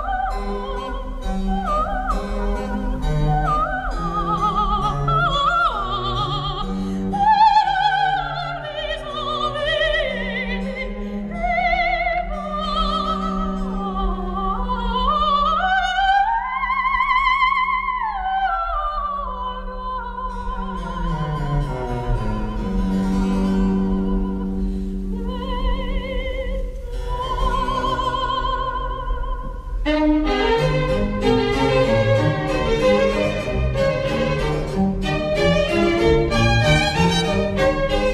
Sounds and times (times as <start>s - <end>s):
Opera: 0.0s - 38.1s.